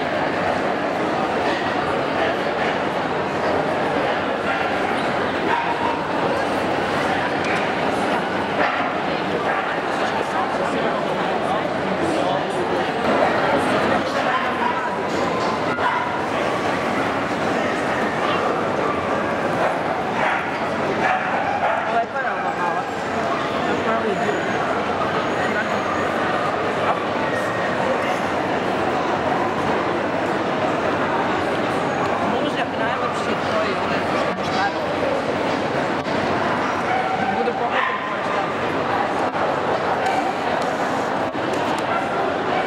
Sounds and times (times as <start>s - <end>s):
Speech: 0.0s - 42.6s
Bow-wow: 4.5s - 6.1s, 19.6s - 22.0s, 36.7s - 38.4s.